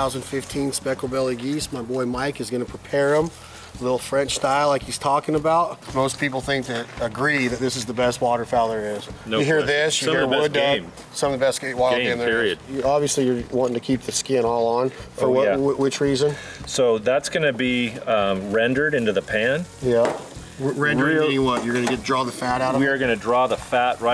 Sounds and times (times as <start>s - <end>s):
Speech: 0.0s - 24.1s.